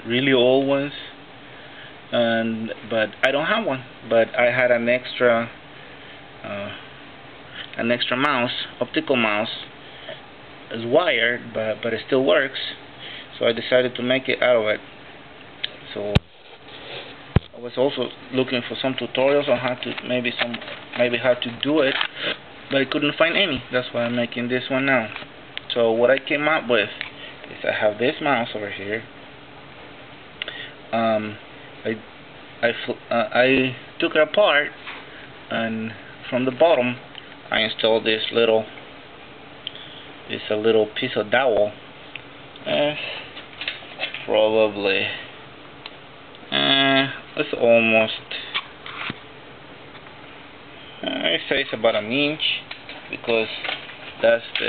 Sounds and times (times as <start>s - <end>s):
Speech: 0.0s - 1.2s, 2.1s - 5.6s, 6.4s - 6.8s, 7.8s - 9.7s, 10.7s - 14.8s, 15.8s - 16.2s, 17.5s - 22.1s, 22.7s - 29.1s, 30.9s - 34.8s, 35.5s - 38.8s, 40.3s - 41.8s, 42.6s - 43.2s, 44.2s - 45.3s, 46.5s - 48.5s, 51.0s - 54.6s.